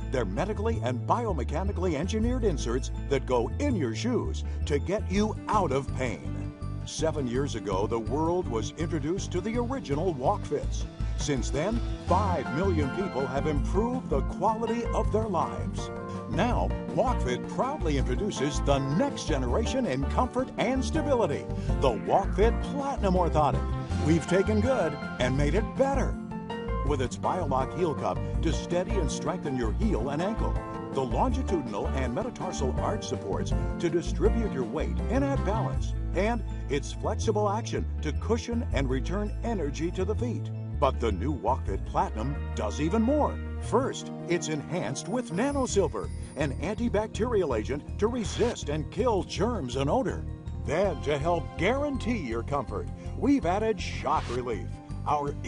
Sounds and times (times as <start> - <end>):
Speech: 0.0 - 6.3, 6.9 - 26.2, 26.9 - 55.4
Music: 0.0 - 55.4.